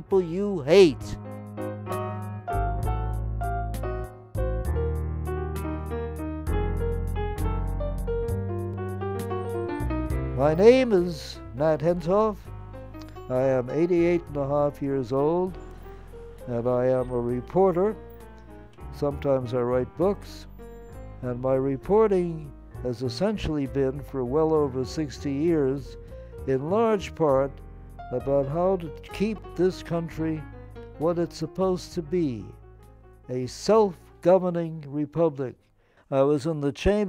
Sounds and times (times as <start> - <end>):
Male speech, man speaking: 0.0 - 1.2, 10.4 - 12.5, 13.3 - 15.6, 16.5 - 18.0, 18.9 - 20.5, 21.2 - 32.6, 33.3 - 37.0
Narration, monologue: 0.0 - 4.5, 9.2 - 37.0
Music: 0.0 - 37.0.